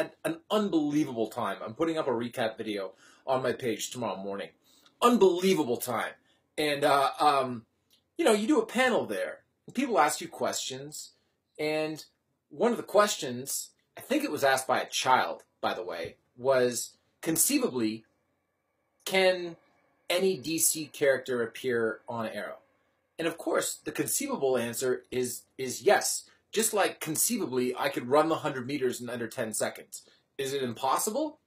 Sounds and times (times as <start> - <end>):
Speech: 0.0 - 18.0, 19.1 - 22.6, 23.2 - 31.4.